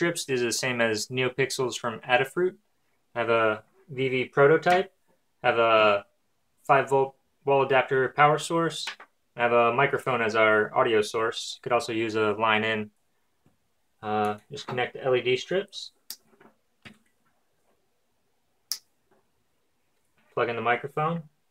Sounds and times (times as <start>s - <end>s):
Speech: 0.0s - 2.6s, 3.2s - 13.0s, 14.0s - 16.0s, 20.3s - 21.4s.